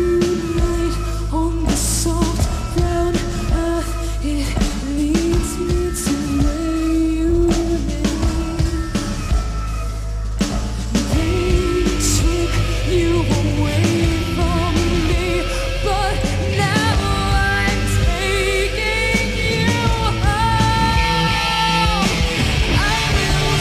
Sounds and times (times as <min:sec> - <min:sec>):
Punk rock: 0:00.0 - 0:23.6
Singing: 0:00.0 - 0:23.6.